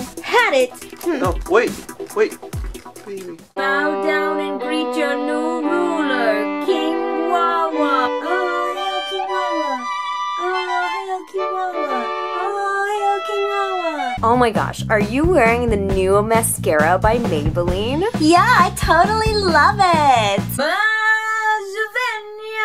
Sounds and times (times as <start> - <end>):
Violin, fiddle: 3.6 - 14.2.